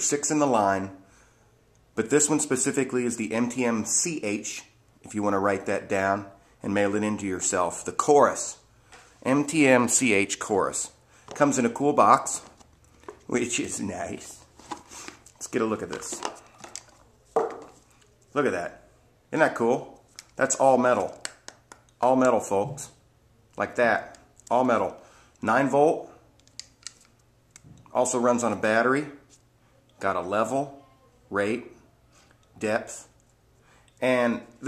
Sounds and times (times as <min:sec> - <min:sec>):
Speech: 0:00.0 - 0:01.0, 0:02.0 - 0:08.6, 0:09.2 - 0:12.6, 0:13.3 - 0:14.4, 0:15.4 - 0:16.3, 0:18.3 - 0:21.2, 0:22.0 - 0:23.0, 0:23.6 - 0:26.2, 0:27.9 - 0:29.2, 0:30.0 - 0:31.8, 0:32.6 - 0:33.2, 0:34.0 - 0:34.6.